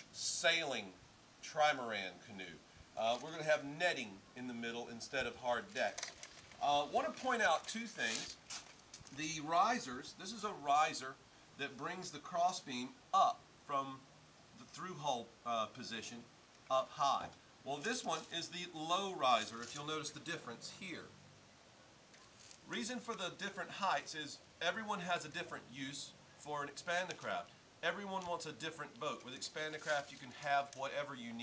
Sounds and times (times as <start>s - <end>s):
Speech: 0.2s - 6.0s, 6.6s - 8.4s, 9.1s - 14.0s, 14.6s - 21.2s, 22.7s - 31.4s.